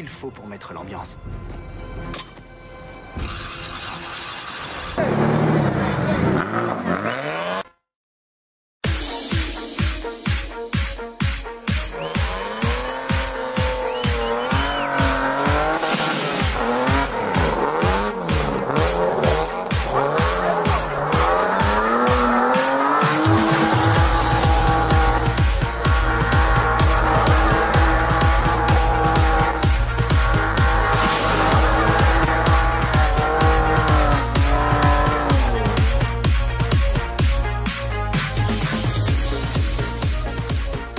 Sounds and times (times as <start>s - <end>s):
Music: 0.0s - 5.0s, 8.8s - 40.9s
Car: 1.2s - 7.8s, 12.0s - 36.0s.